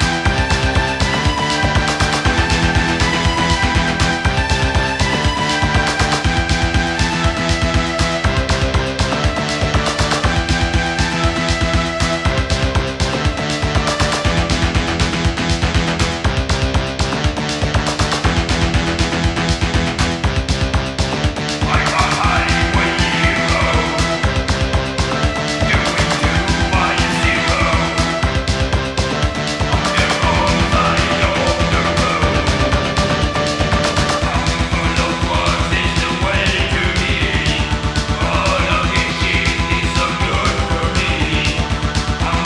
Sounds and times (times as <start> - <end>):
Music: 0.0 - 42.4.